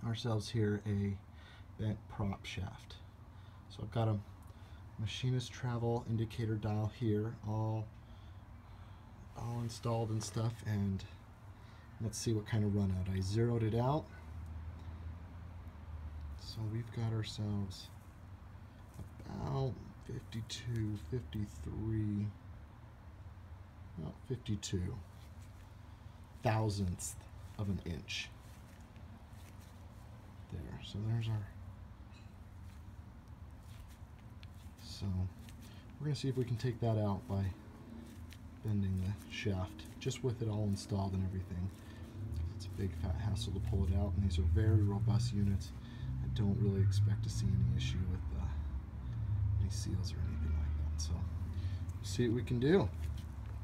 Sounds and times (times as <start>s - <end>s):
Speech: 0.0s - 3.1s, 3.7s - 4.4s, 5.0s - 8.0s, 9.3s - 11.2s, 12.0s - 14.2s, 16.4s - 18.0s, 19.0s - 22.4s, 23.9s - 25.1s, 26.4s - 28.4s, 30.4s - 31.6s, 34.8s - 35.4s, 36.0s - 37.6s, 38.6s - 41.8s, 42.4s - 48.8s, 49.6s - 51.4s, 52.0s - 53.0s.